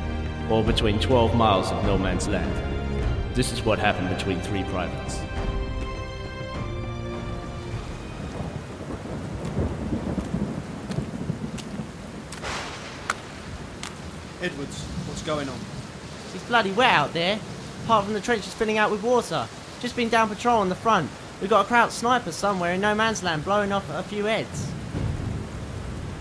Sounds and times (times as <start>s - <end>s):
Speech: 0.5s - 2.6s, 3.4s - 5.2s, 14.4s - 15.6s, 16.3s - 24.8s.